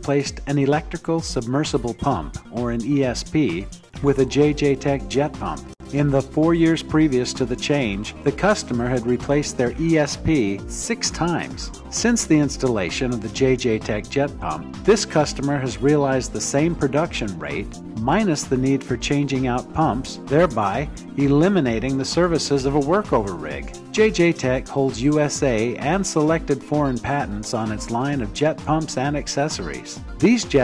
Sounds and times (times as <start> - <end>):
Music: 0.0 - 30.6
Speech: 0.0 - 30.6.